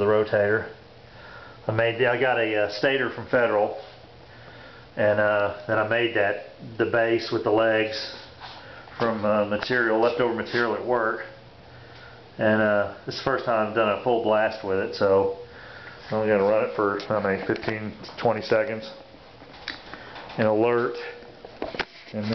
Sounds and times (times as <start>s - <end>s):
Speech: 0.0s - 0.8s, 1.7s - 3.9s, 5.0s - 8.3s, 9.0s - 11.4s, 12.4s - 15.4s, 16.1s - 19.0s, 20.4s - 21.2s, 22.1s - 22.3s.